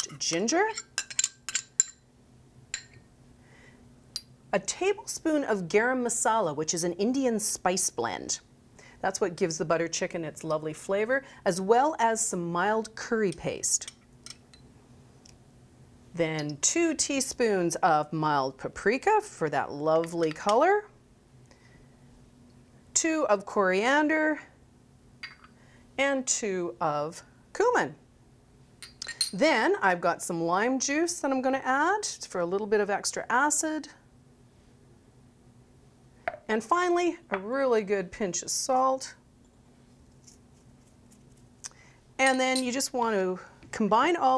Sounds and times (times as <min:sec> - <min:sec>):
Speech: 0:00.0 - 0:00.8, 0:04.6 - 0:13.9, 0:16.2 - 0:20.9, 0:23.0 - 0:24.5, 0:26.0 - 0:28.0, 0:29.4 - 0:34.0, 0:36.5 - 0:39.2, 0:42.2 - 0:44.3.